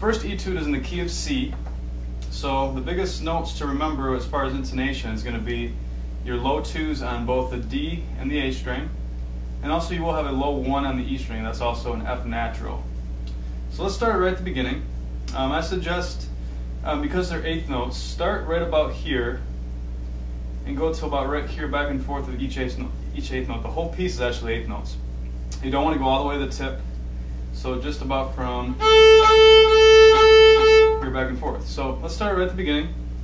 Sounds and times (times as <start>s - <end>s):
Speech: 0.0s - 9.0s, 9.6s - 13.0s, 13.7s - 19.5s, 20.6s - 26.9s, 27.5s - 28.9s, 30.9s - 33.0s.